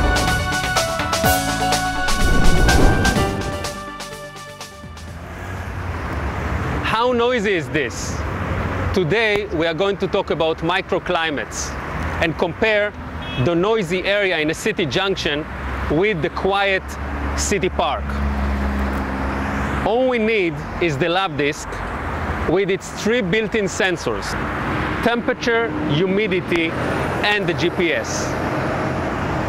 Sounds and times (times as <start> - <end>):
Field recording: 0.0 - 4.1, 4.8 - 29.4
Music: 0.0 - 5.3
Speech: 6.9 - 8.2, 9.0 - 18.2, 19.8 - 21.8, 22.5 - 24.4, 25.0 - 28.4.